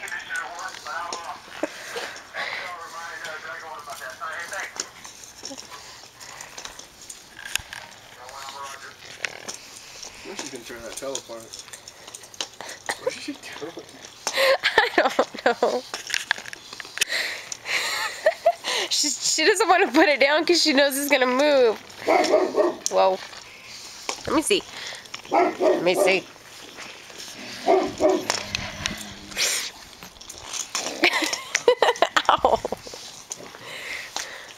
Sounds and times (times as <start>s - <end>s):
Bark: 22.0s - 22.9s, 25.3s - 26.2s, 27.6s - 28.4s.